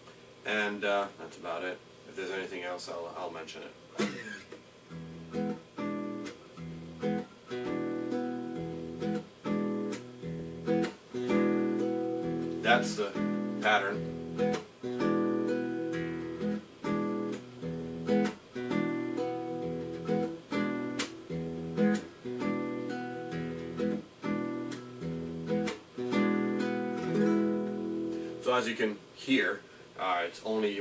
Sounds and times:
Speech: 0.4s - 3.8s, 12.6s - 14.0s, 28.4s - 30.8s
Acoustic guitar: 4.0s - 28.9s.

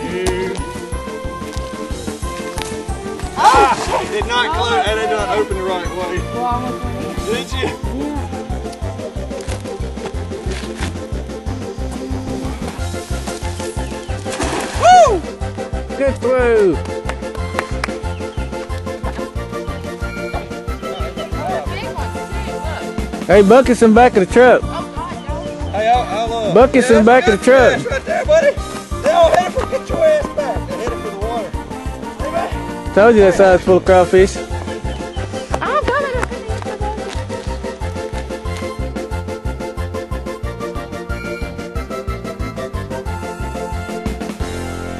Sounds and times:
Music: 0.0s - 45.0s.

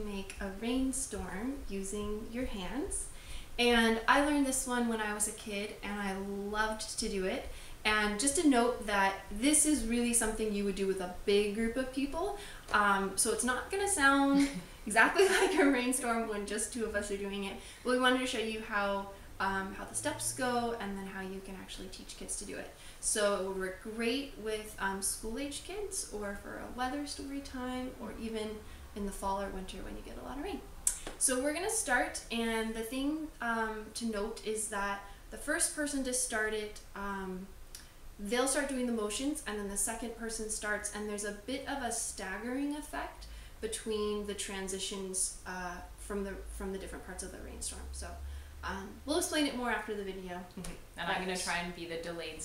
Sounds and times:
Speech: 0.0s - 37.5s, 38.2s - 52.4s.

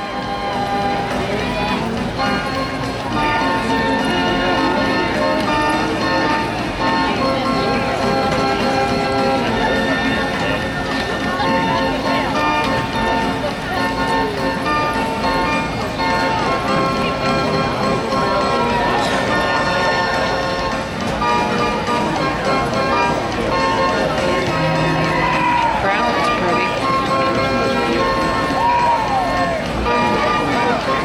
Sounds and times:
Music: 0.0s - 31.0s
Speech: 0.0s - 31.0s.

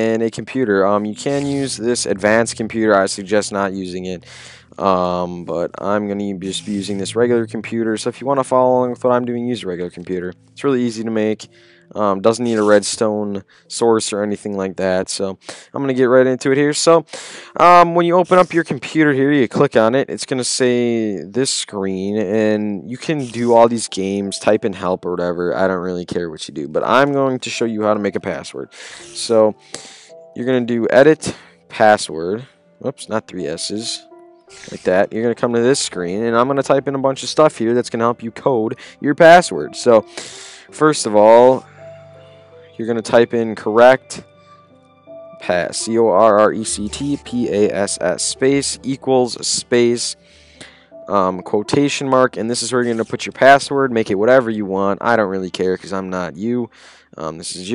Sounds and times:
Speech: 0.0s - 29.6s, 30.4s - 41.7s, 42.8s - 44.2s, 45.4s - 50.2s, 51.0s - 57.7s.

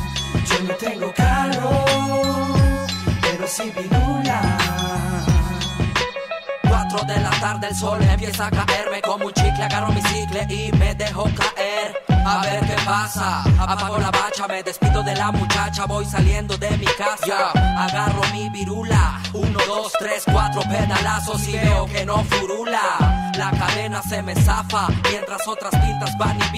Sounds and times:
Music: 0.0s - 26.5s.

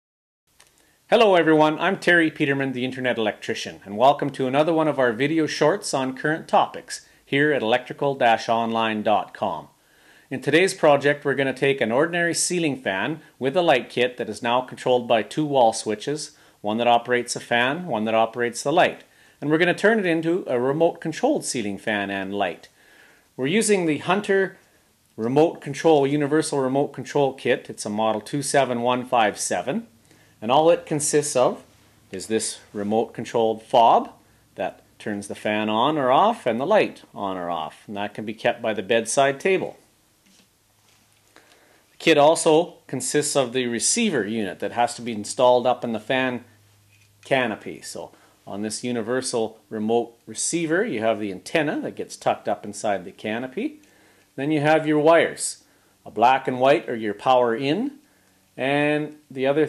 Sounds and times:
Speech: 1.1s - 22.8s, 23.4s - 24.6s, 25.2s - 39.9s, 42.0s - 46.5s, 47.2s - 53.8s, 54.4s - 58.0s, 58.6s - 59.6s.

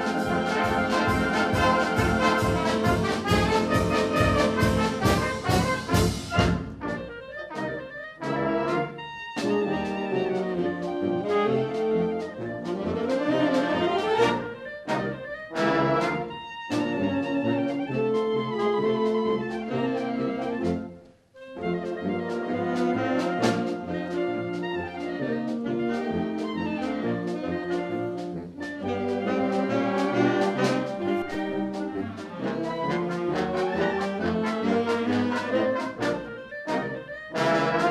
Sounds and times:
Clarinet: 0.0s - 37.9s.

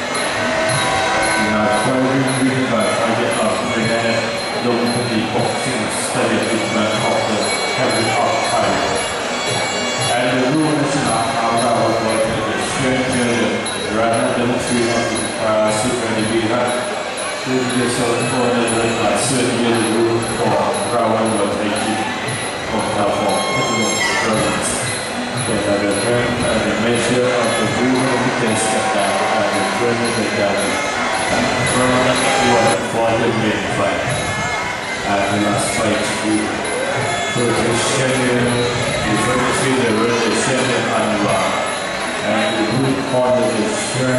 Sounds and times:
Speech: 0.7s - 34.4s, 35.0s - 44.1s.

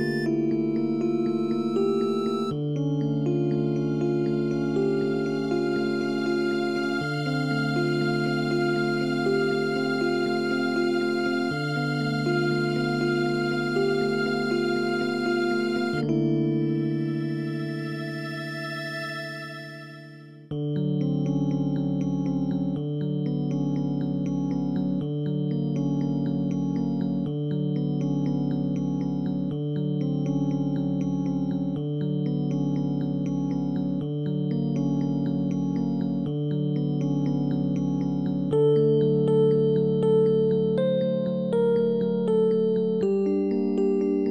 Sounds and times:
Electric piano: 0.0s - 18.2s.

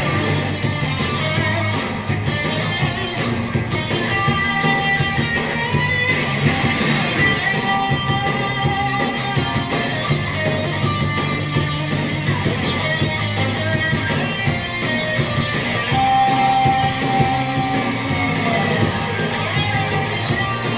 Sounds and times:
Electric guitar: 0.0s - 20.7s.

